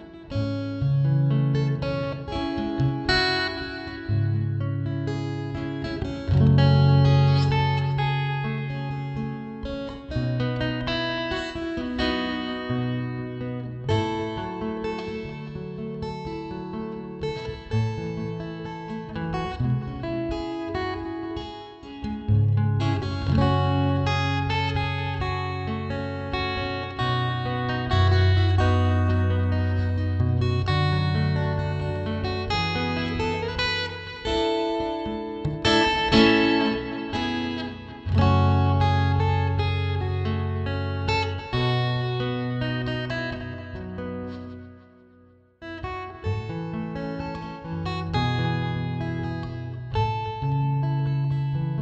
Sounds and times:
Guitar: 0.0 - 51.8.

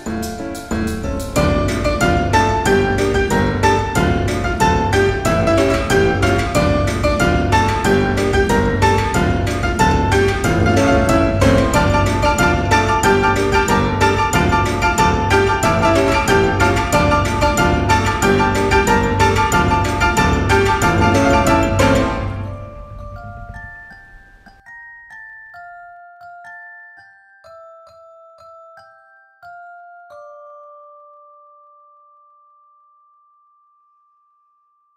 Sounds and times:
Glockenspiel: 0.0 - 34.9.

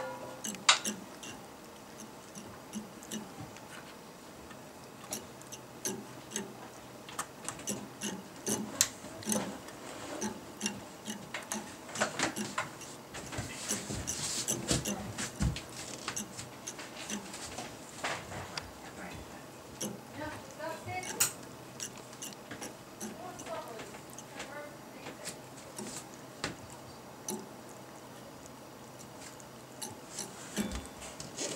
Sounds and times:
Speech: 20.2 - 21.3, 23.1 - 25.4.

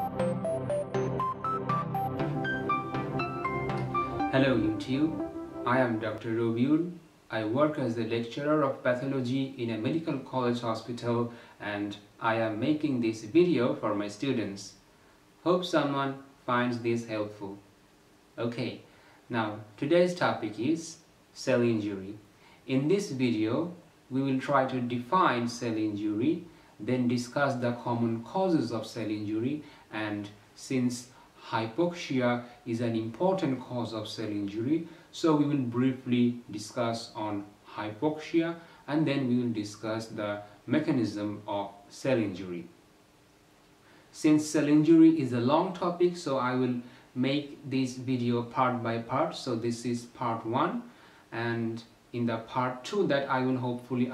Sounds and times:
Speech: 4.3 - 14.8, 15.4 - 17.7, 18.4 - 42.8, 44.1 - 54.1.

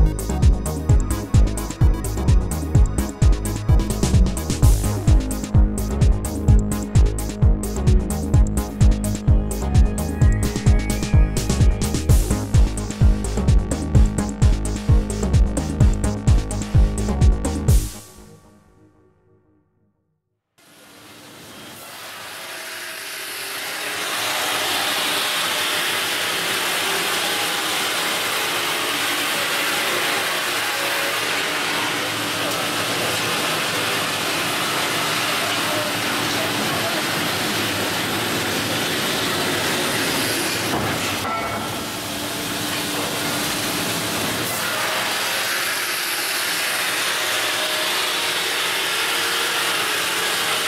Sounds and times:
Music: 0.0 - 20.6.

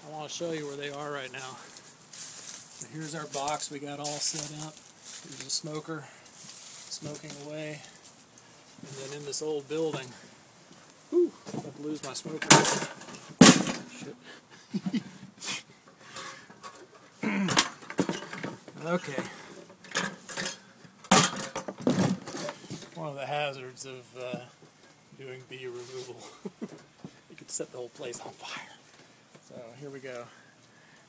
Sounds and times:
Speech: 0.0 - 1.7, 2.8 - 6.1, 6.9 - 8.0, 8.8 - 10.2, 11.6 - 12.7, 13.9 - 14.2, 18.8 - 19.4, 23.0 - 24.6, 25.2 - 26.4, 27.3 - 28.8, 29.4 - 30.4.

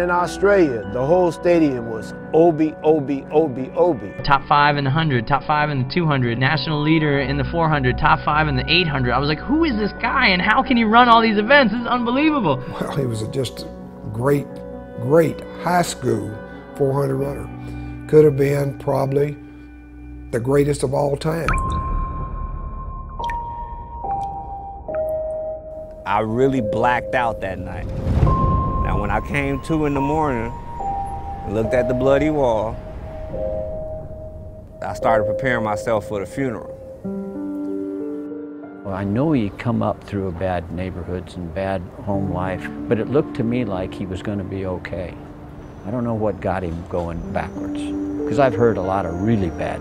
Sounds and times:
Music: 0.0 - 49.8
Speech: 12.7 - 17.5, 20.4 - 21.5, 26.1 - 27.8, 28.9 - 30.5, 31.5 - 32.8, 34.8 - 36.7, 38.9 - 45.2, 45.9 - 49.8.

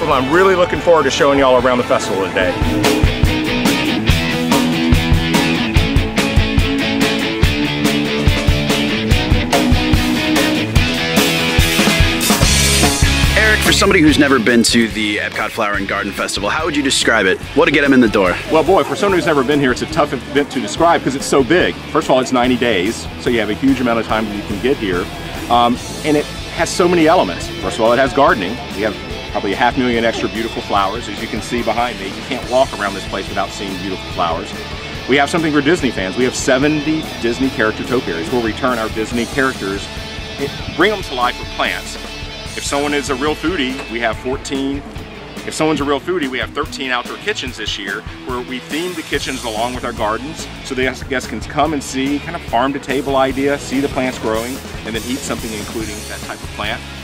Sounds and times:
Speech: 0.0 - 2.6, 13.2 - 44.8, 45.4 - 56.8
Music: 0.0 - 57.0.

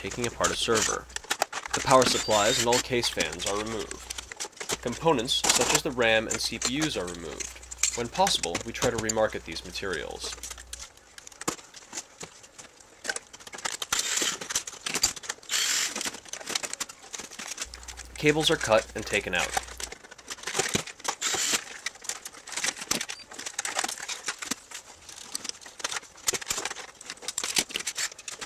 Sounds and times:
Speech: 0.0 - 1.1, 1.7 - 4.1, 4.8 - 10.4, 18.1 - 19.7.

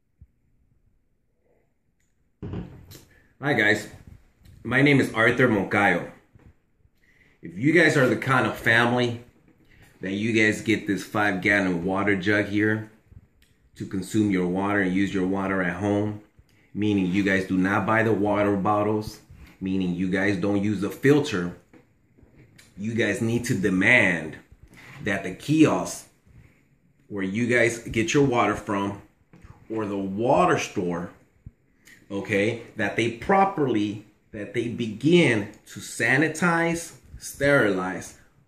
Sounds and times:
Speech: 3.4 - 4.0, 4.6 - 6.2, 7.4 - 9.3, 10.0 - 13.0, 13.8 - 21.6, 22.7 - 26.1, 27.1 - 29.1, 29.7 - 31.2, 32.0 - 38.3.

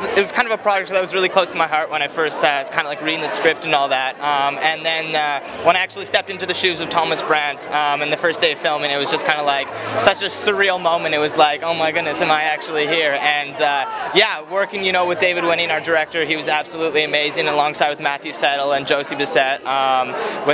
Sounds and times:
Speech: 0.0 - 20.5.

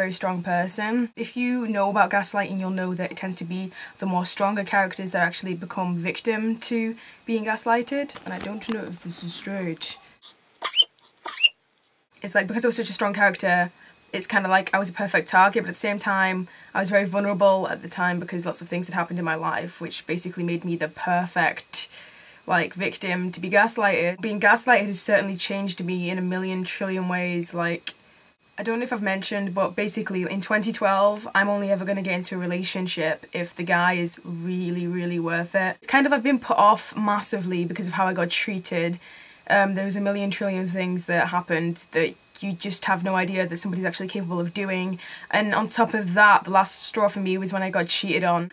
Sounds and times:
Speech: 0.0 - 10.0, 12.2 - 21.9, 22.5 - 27.9, 28.6 - 48.5.

